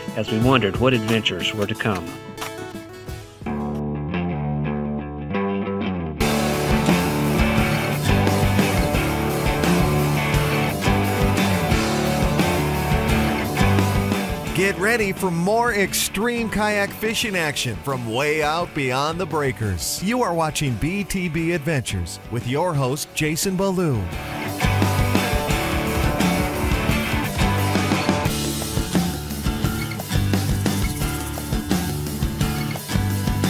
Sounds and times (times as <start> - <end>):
Music: 0.0 - 33.5
Speech: 0.2 - 2.2, 14.5 - 24.2.